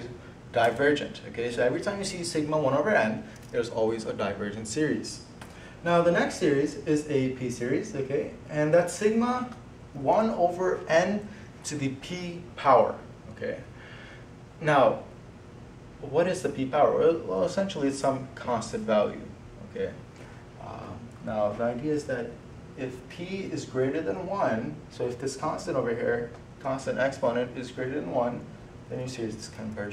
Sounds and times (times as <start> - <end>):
Speech: 0.0 - 13.7, 14.6 - 15.1, 16.0 - 20.0, 20.6 - 29.9.